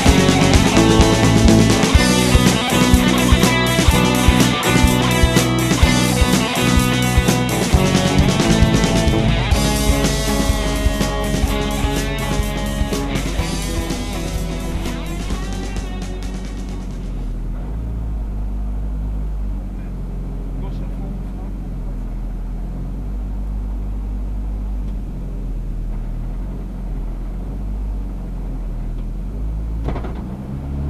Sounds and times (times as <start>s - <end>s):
Music: 0.0s - 17.6s.